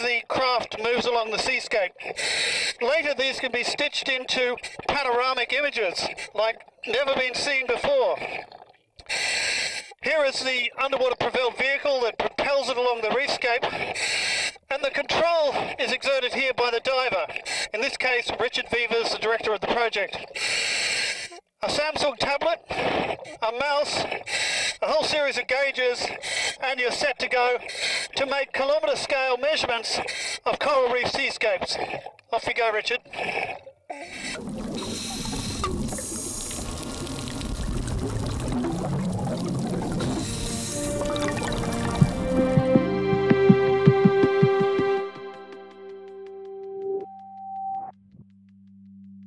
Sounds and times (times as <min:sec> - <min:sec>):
Speech: 0:00.0 - 0:02.0, 0:02.8 - 0:08.3, 0:10.0 - 0:13.8, 0:14.7 - 0:20.2, 0:21.6 - 0:22.7, 0:23.3 - 0:24.1, 0:24.8 - 0:27.6, 0:28.2 - 0:33.4.